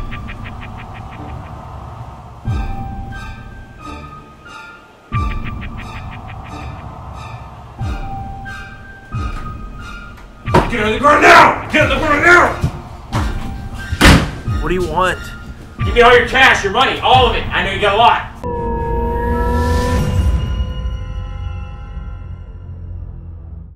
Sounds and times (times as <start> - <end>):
Music: 0.0 - 23.7
Speech: 15.8 - 18.3.